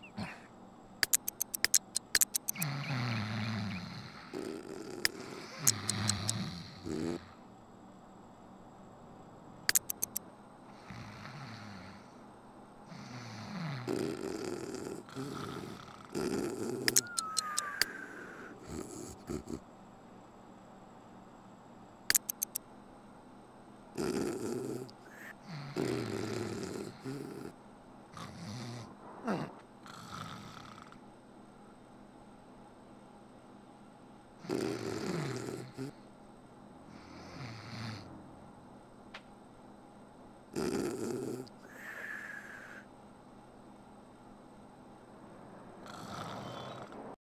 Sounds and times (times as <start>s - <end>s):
Snoring: 2.5s - 7.4s, 10.7s - 12.2s, 12.9s - 17.2s, 17.9s - 19.6s, 24.0s - 31.0s, 34.4s - 36.1s, 36.9s - 38.1s, 40.5s - 42.9s, 45.8s - 47.0s.